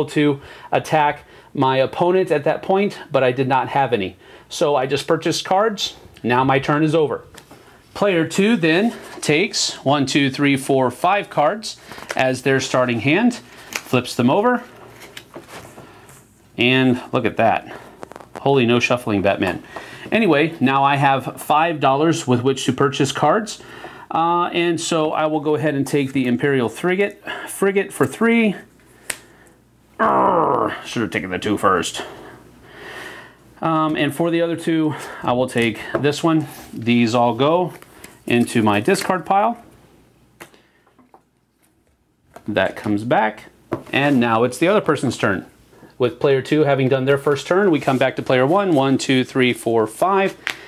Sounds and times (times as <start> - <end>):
Speech: 0.0 - 7.3, 8.0 - 14.7, 16.6 - 17.8, 18.4 - 28.7, 30.0 - 32.2, 33.6 - 39.7, 42.4 - 50.4.